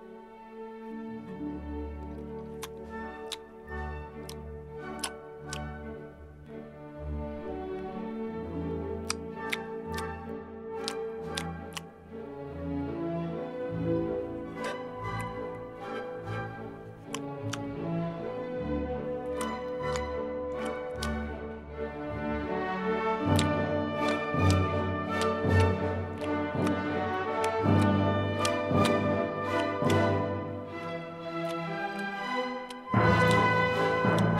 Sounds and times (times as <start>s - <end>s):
Music: 0.0s - 34.3s.